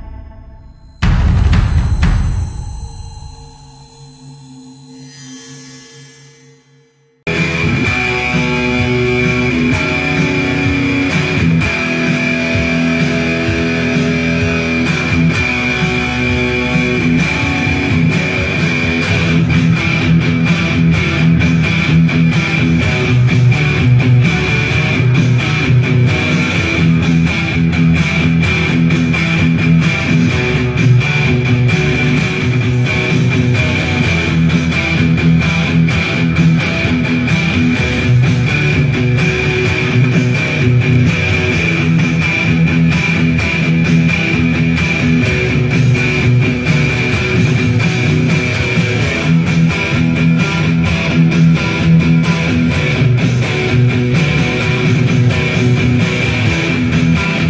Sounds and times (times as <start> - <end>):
Electric guitar: 7.3 - 57.4.